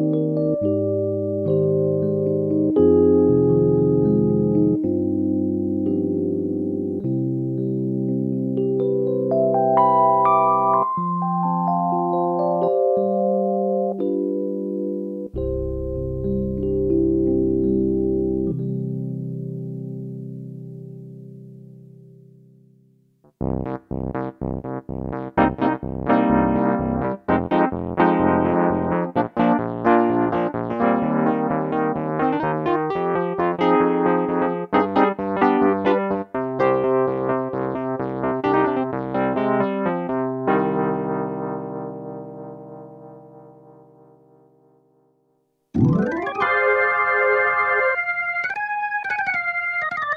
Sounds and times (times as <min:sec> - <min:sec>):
Electric piano: 0:00.0 - 0:22.5, 0:23.3 - 0:44.8, 0:45.8 - 0:50.1.